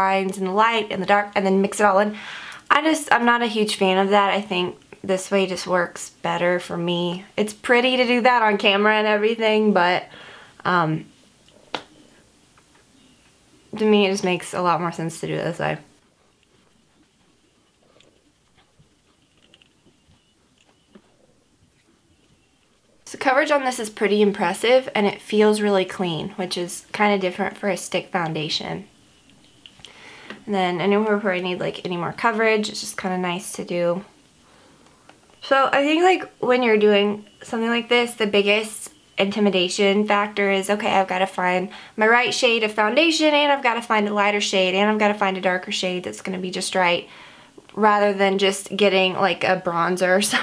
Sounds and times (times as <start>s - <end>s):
Speech: 0.0s - 11.1s, 13.7s - 15.9s, 23.1s - 28.9s, 30.5s - 34.1s, 35.4s - 47.1s, 47.8s - 50.4s
Inside, small room: 0.0s - 50.4s.